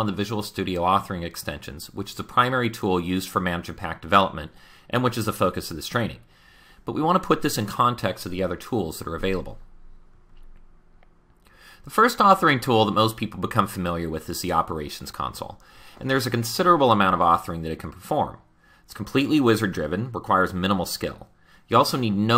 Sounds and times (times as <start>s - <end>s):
Speech: 0.0s - 6.3s, 6.9s - 9.6s, 11.9s - 22.3s.